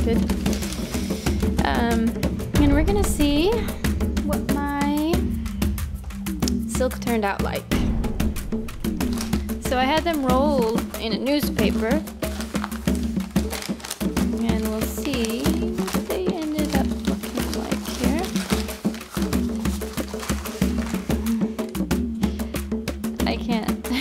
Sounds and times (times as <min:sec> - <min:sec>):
Music: 0:00.0 - 0:24.0
Speech: 0:01.6 - 0:03.7, 0:04.3 - 0:05.2, 0:06.7 - 0:07.7, 0:09.7 - 0:12.0, 0:14.4 - 0:18.4, 0:23.2 - 0:23.8.